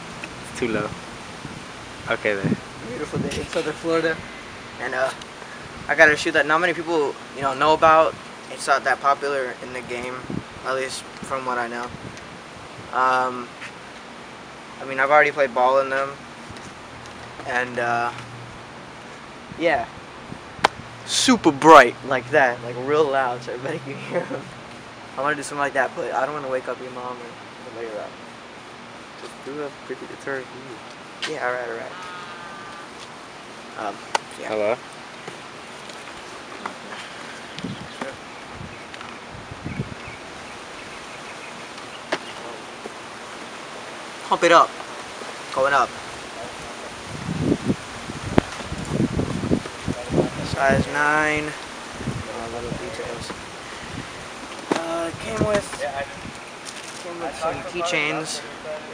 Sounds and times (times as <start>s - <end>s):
Speech: 0.5s - 0.9s, 2.1s - 4.2s, 4.8s - 5.2s, 5.9s - 11.9s, 12.9s - 13.5s, 14.8s - 16.2s, 17.4s - 18.2s, 19.6s - 19.9s, 21.1s - 24.4s, 25.2s - 28.1s, 29.2s - 32.0s, 33.8s - 34.8s, 50.0s - 51.6s, 52.2s - 53.4s, 54.7s - 56.2s, 57.0s - 58.9s.